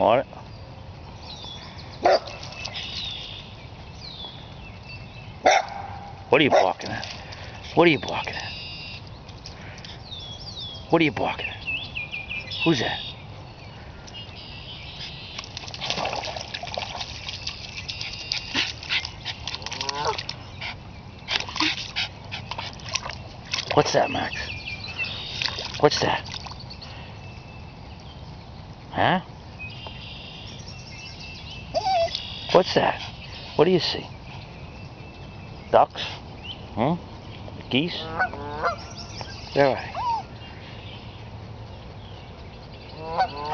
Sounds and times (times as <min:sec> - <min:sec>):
Stream: 0:00.0 - 0:43.5
Speech: 0:07.8 - 0:08.5, 0:10.9 - 0:11.6, 0:12.6 - 0:13.1, 0:23.8 - 0:24.5, 0:25.8 - 0:26.2, 0:28.9 - 0:29.3, 0:33.6 - 0:34.1, 0:39.6 - 0:40.0.